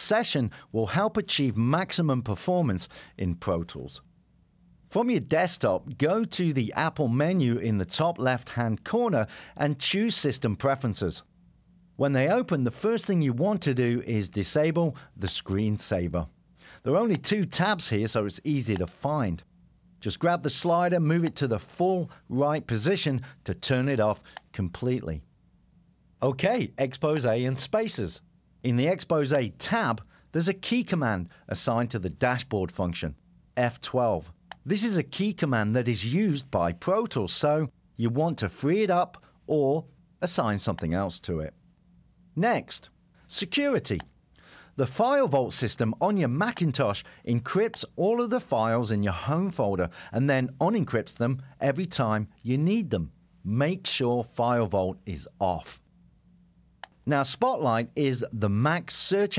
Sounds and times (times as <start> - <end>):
Speech: 0.0 - 4.1, 4.9 - 11.3, 12.0 - 25.3, 26.2 - 41.6, 42.4 - 44.1, 44.8 - 55.8, 57.0 - 59.3.